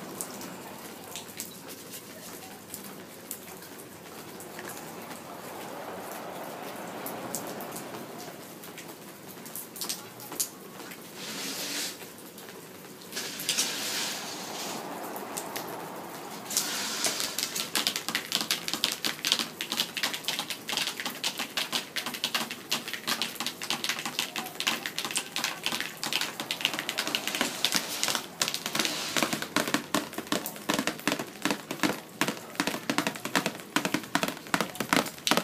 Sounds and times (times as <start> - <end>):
Rain on surface: 0.0 - 35.4
Raindrop: 0.0 - 35.4.